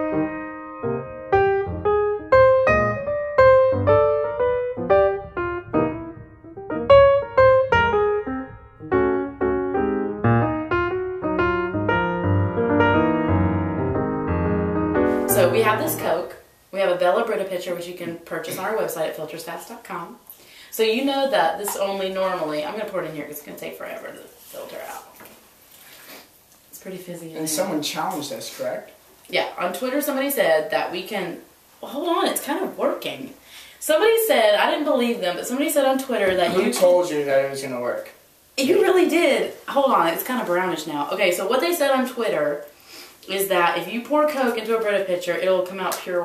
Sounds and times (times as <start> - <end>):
Speech: 15.3 - 25.2, 26.8 - 42.7, 43.3 - 46.2.